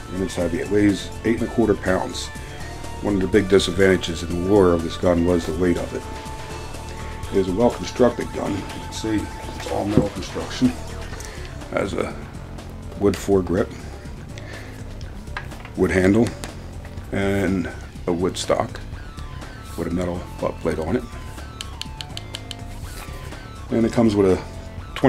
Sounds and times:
Music: 0.0s - 25.0s
Speech: 0.1s - 2.3s, 3.0s - 6.0s, 7.3s - 10.8s, 11.7s - 12.2s, 13.0s - 13.8s, 15.8s - 16.4s, 17.1s - 18.8s, 19.8s - 21.1s, 23.7s - 25.0s.

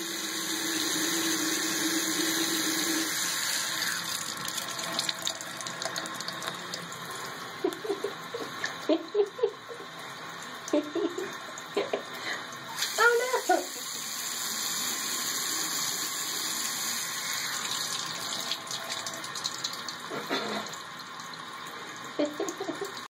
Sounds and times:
Water tap, faucet: 0.0s - 23.1s.

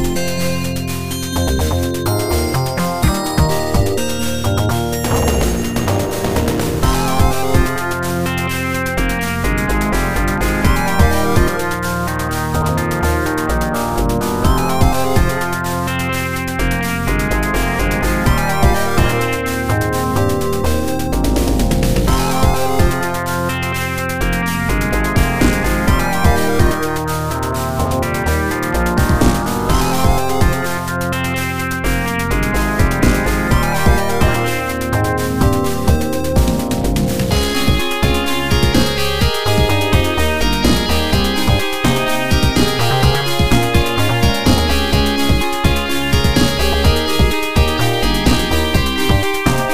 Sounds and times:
Music: 0.0s - 49.7s.

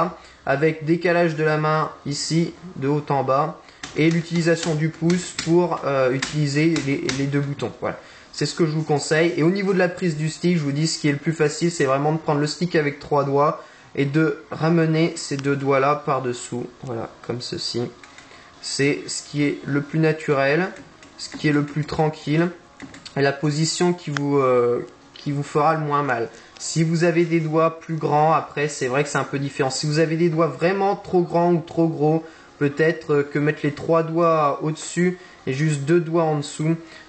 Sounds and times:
Speech: 0.0s - 18.0s, 18.6s - 36.9s.

